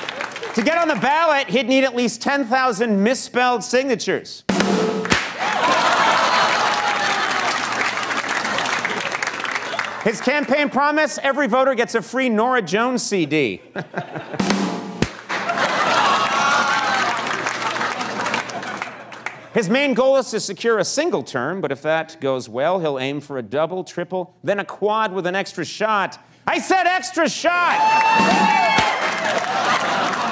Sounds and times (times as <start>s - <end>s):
Rimshot: 4.5s - 5.5s, 14.4s - 15.6s, 28.2s - 29.0s.